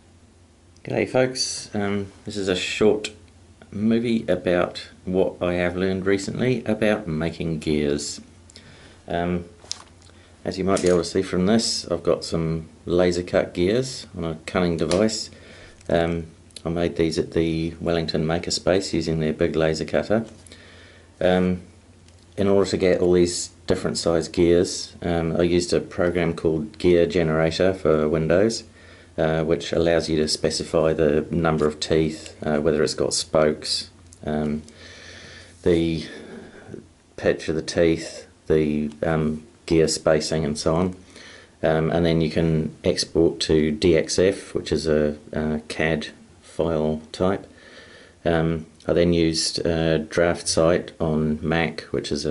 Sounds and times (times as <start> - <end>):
Speech: 0.8 - 8.3, 9.1 - 9.6, 10.4 - 20.4, 21.2 - 21.7, 22.4 - 34.7, 35.6 - 41.0, 41.6 - 47.5, 48.2 - 52.3.